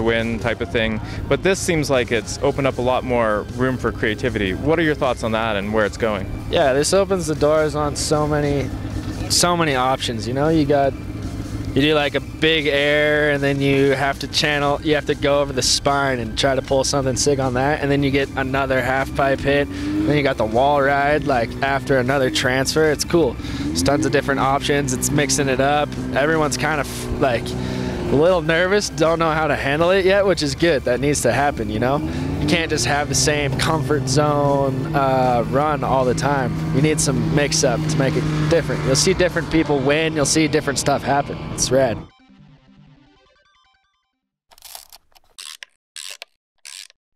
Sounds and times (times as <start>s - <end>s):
Speech: 0.0s - 11.0s, 11.8s - 27.5s, 28.1s - 42.0s
Music: 0.0s - 44.2s.